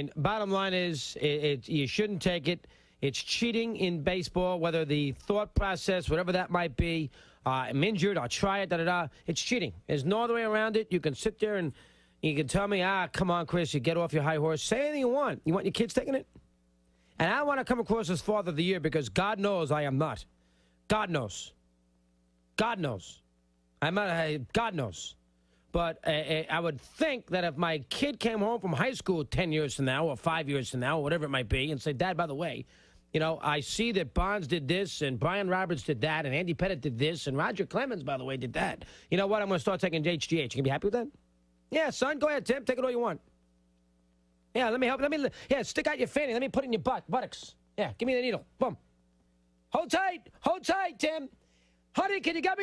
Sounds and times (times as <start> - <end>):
Speech: 0.0 - 16.4, 17.2 - 20.3, 20.9 - 21.6, 22.6 - 23.2, 23.8 - 43.3, 44.5 - 48.8, 49.7 - 51.4, 52.0 - 52.6.